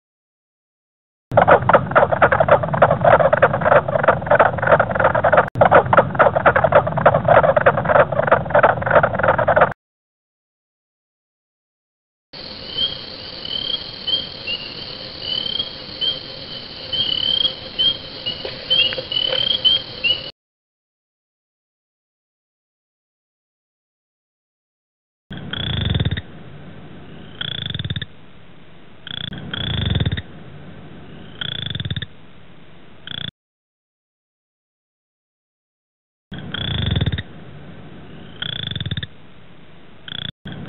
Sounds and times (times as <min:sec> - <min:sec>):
Frog: 0:01.4 - 0:09.8, 0:12.4 - 0:20.3, 0:25.3 - 0:26.3, 0:27.1 - 0:28.2, 0:29.0 - 0:30.3, 0:31.1 - 0:32.2, 0:33.0 - 0:33.3, 0:36.4 - 0:37.3, 0:38.1 - 0:39.2, 0:40.1 - 0:40.6.